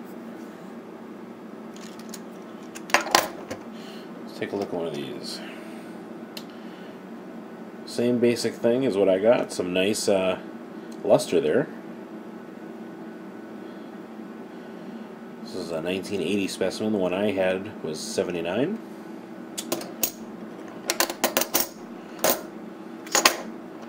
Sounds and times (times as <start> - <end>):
Speech: 4.3 - 5.6, 7.9 - 11.8, 15.4 - 18.8.